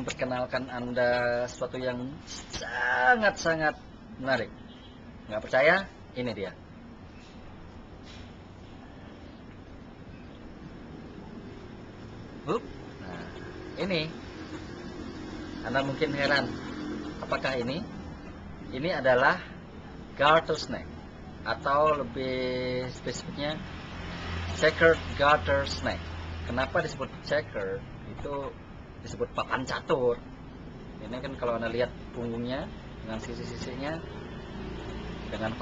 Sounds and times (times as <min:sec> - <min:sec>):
Speech: 0:00.0 - 0:04.5, 0:05.3 - 0:06.6, 0:12.5 - 0:14.2, 0:15.6 - 0:16.6, 0:17.2 - 0:17.9, 0:18.7 - 0:19.5, 0:20.2 - 0:23.6, 0:24.5 - 0:30.2, 0:31.0 - 0:34.1, 0:35.3 - 0:35.6
Outside, urban or manmade: 0:00.0 - 0:35.6.